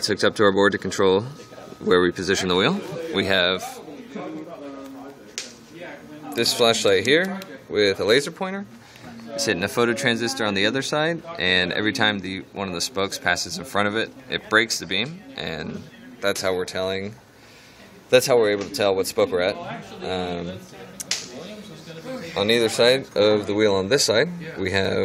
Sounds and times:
Speech: 0.0 - 17.2, 17.9 - 25.0.

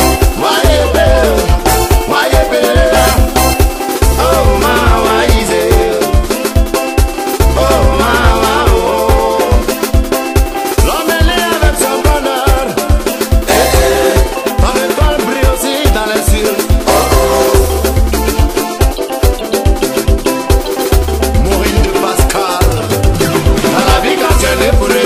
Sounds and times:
Music: 0.0 - 25.0.

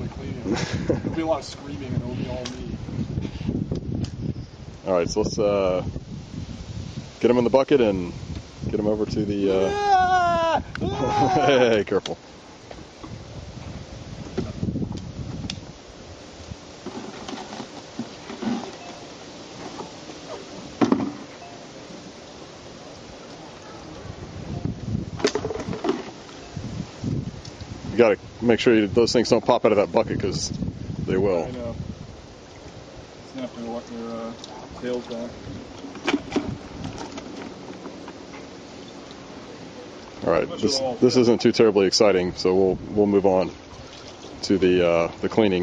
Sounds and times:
Outside, rural or natural: 0.0 - 45.6
Vehicle: 31.5 - 45.6.

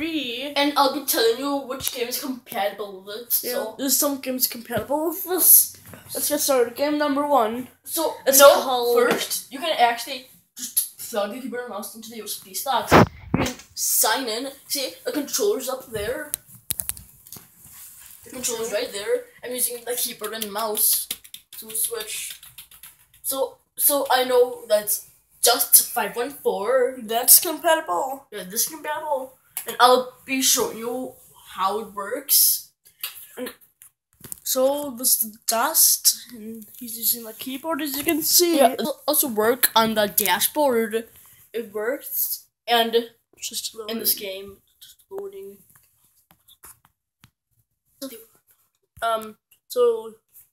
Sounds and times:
Speech: 0.0 - 16.4, 18.3 - 22.4, 23.2 - 32.7, 34.4 - 45.6, 48.0 - 48.3, 49.0 - 50.2.

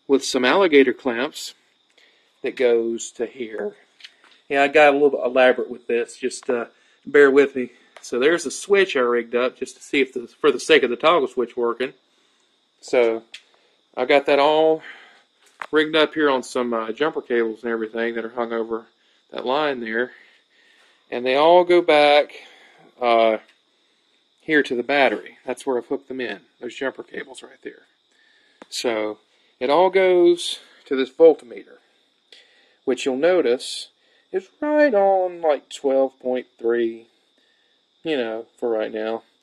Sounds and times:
Narration, monologue: 0.0 - 39.4.

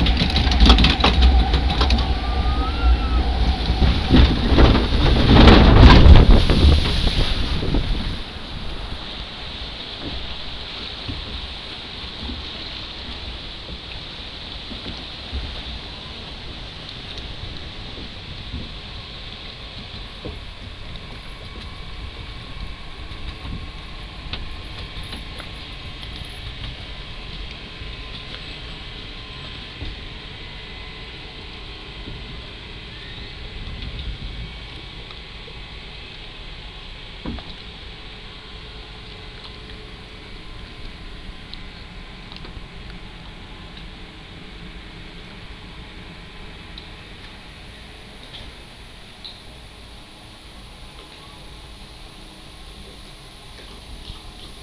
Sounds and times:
Water: 0.0 - 54.6.

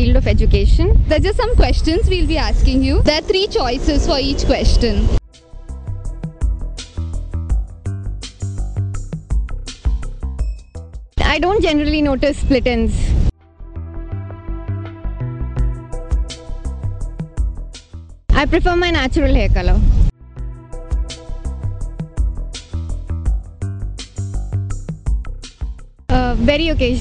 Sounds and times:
Speech: 0.0 - 5.1, 11.2 - 13.1, 18.3 - 19.8, 26.1 - 27.0
Music: 0.0 - 27.0.

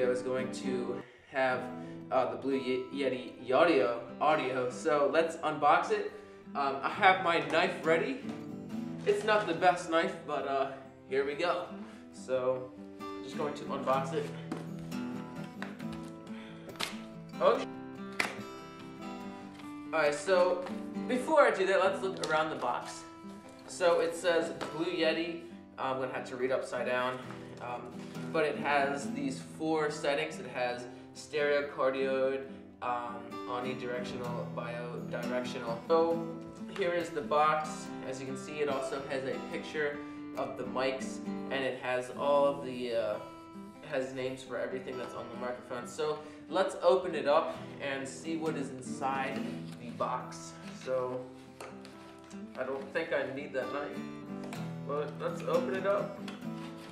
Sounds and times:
Speech: 0.0 - 8.3, 9.0 - 14.4, 17.4 - 17.7, 20.0 - 23.1, 23.7 - 43.2, 43.9 - 51.3, 52.6 - 54.0, 54.9 - 56.2
Music: 0.0 - 56.9.

